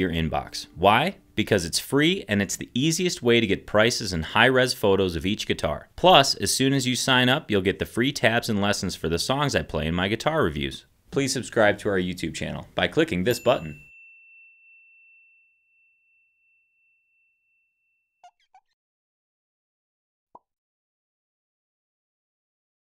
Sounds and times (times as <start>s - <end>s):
Speech: 0.0s - 13.8s.